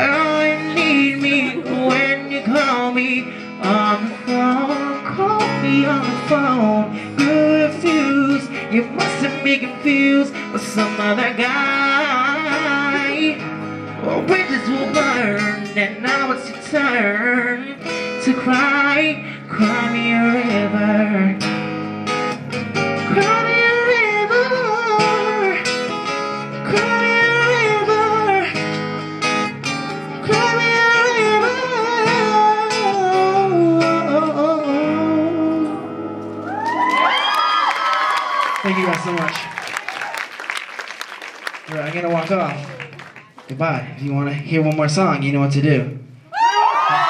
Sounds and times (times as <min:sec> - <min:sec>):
Music: 0:00.0 - 0:39.2.